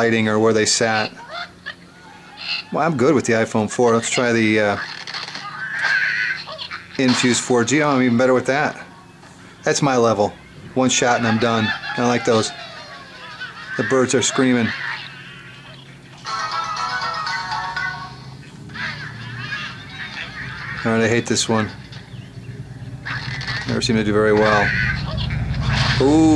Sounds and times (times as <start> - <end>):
Inside, small room: 0.0 - 26.3.